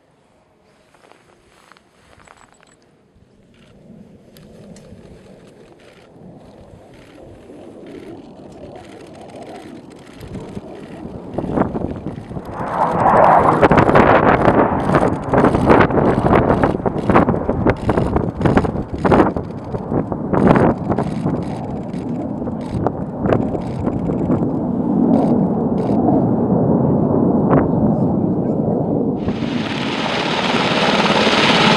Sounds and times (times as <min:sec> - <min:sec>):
Aircraft: 0:00.0 - 0:31.7.